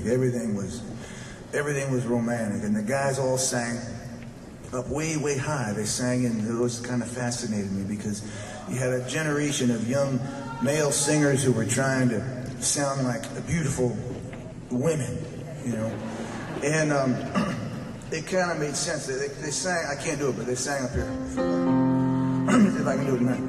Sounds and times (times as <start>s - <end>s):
Male speech, man speaking: 0.0s - 0.9s, 1.6s - 4.0s, 4.7s - 14.1s, 14.7s - 16.0s, 16.6s - 21.1s, 22.5s - 23.4s
Narration, monologue: 0.0s - 23.4s.